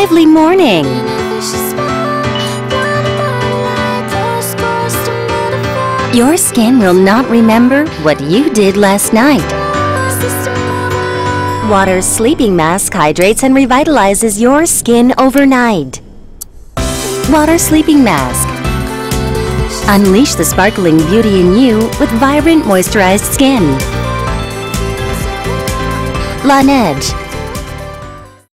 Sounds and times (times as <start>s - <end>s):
Speech: 0.0s - 1.0s, 6.1s - 9.5s, 11.6s - 16.0s, 17.2s - 18.5s, 19.8s - 23.8s, 26.4s - 27.2s
Music: 0.0s - 28.5s.